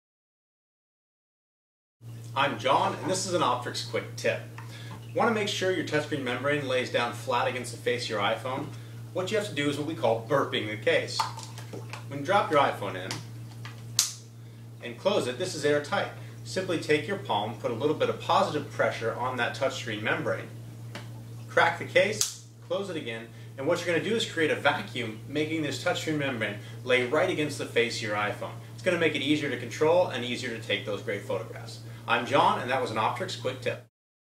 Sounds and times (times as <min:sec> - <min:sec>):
Speech: 0:02.4 - 0:04.5, 0:05.2 - 0:11.2, 0:12.1 - 0:13.2, 0:14.8 - 0:20.5, 0:21.5 - 0:33.9.